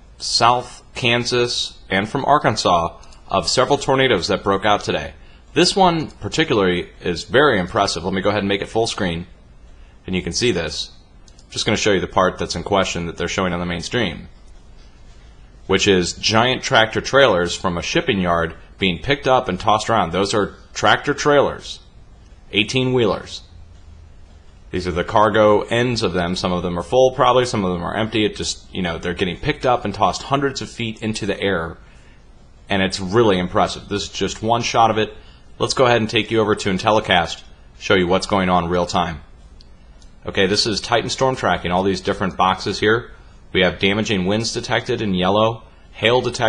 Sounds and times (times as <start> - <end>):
Speech: 0.0 - 9.4, 10.0 - 14.4, 15.7 - 21.9, 22.5 - 23.6, 24.7 - 31.9, 32.7 - 39.4, 40.2 - 46.4.